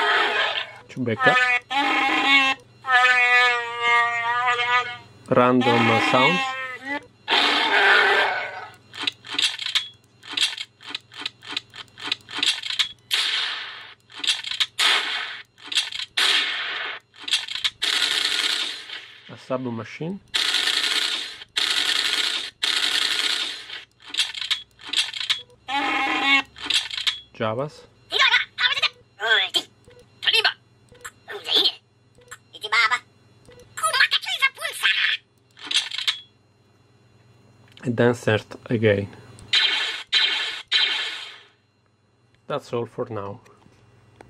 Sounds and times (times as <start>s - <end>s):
Speech: 5.3s - 6.5s, 37.8s - 39.2s, 42.5s - 43.4s
Sound effect: 7.3s - 8.7s, 39.5s - 41.6s.